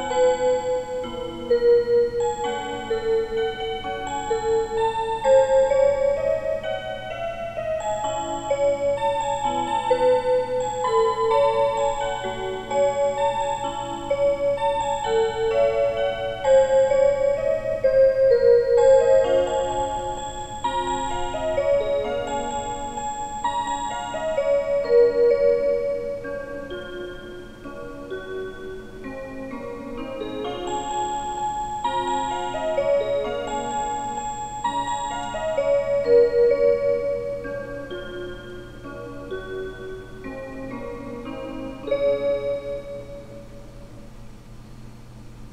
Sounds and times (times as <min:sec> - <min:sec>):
Music: 0:00.0 - 0:45.5.